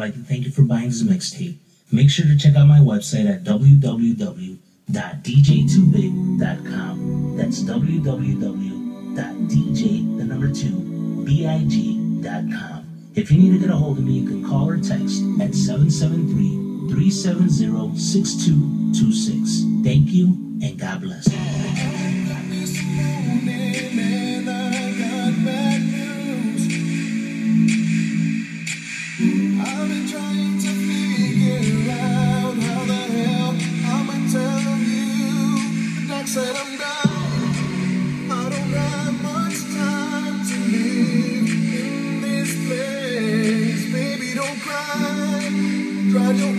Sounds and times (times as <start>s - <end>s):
Speech: 0.0s - 22.4s
Music: 4.8s - 46.5s.